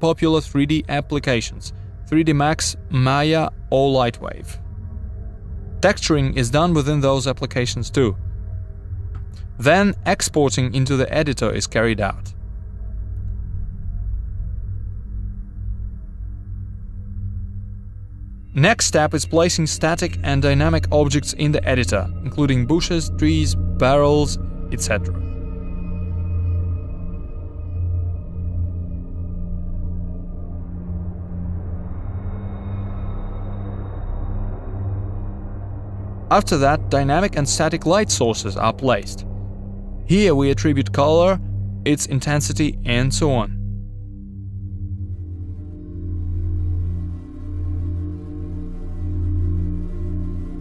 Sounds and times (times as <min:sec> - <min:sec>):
Speech: 0:00.0 - 0:04.6, 0:05.8 - 0:08.2, 0:09.6 - 0:12.3, 0:18.6 - 0:25.2, 0:36.3 - 0:39.2, 0:40.1 - 0:43.6
Music: 0:00.0 - 0:50.6.